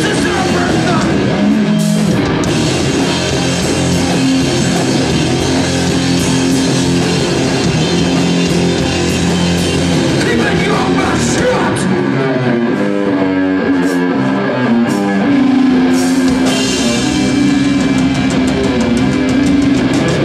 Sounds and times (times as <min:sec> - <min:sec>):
Speech: 0:00.0 - 0:01.3, 0:10.2 - 0:12.0
Heavy metal: 0:00.0 - 0:20.2.